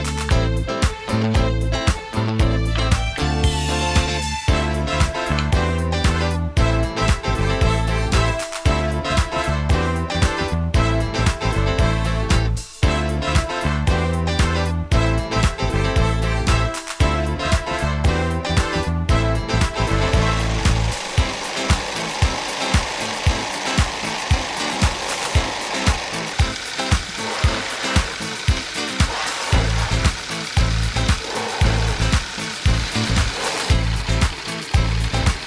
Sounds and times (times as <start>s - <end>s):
Music: 0.0s - 35.4s.